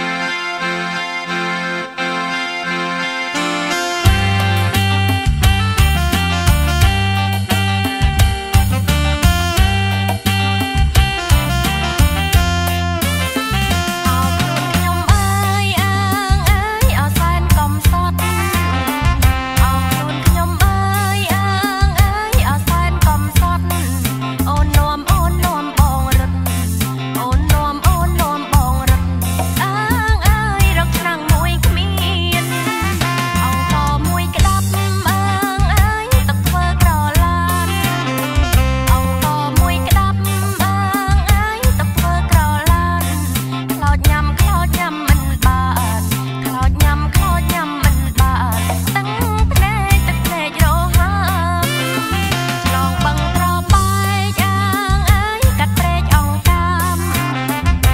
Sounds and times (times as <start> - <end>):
Traditional music: 0.0 - 57.9.